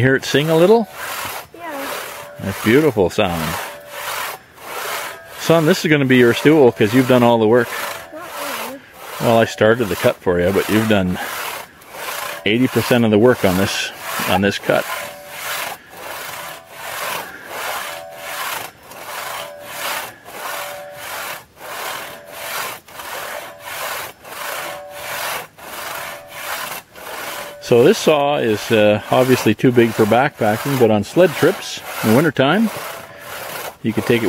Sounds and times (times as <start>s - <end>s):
Sawing: 0.0s - 34.2s
Wood: 0.0s - 34.2s
Rub: 0.3s - 34.2s.